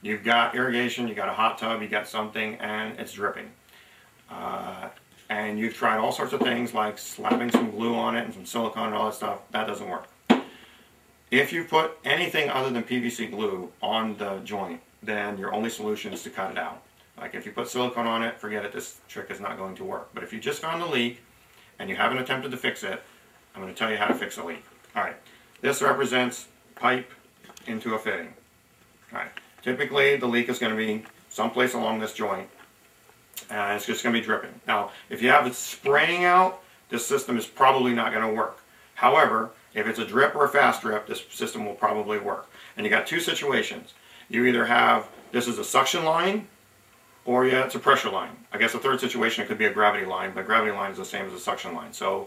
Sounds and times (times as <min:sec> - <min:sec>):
Speech: 0:00.0 - 0:03.6, 0:04.3 - 0:10.1, 0:11.3 - 0:21.2, 0:21.8 - 0:28.4, 0:29.1 - 0:32.6, 0:33.4 - 0:46.6, 0:47.2 - 0:52.2
Inside, small room: 0:00.0 - 0:52.2.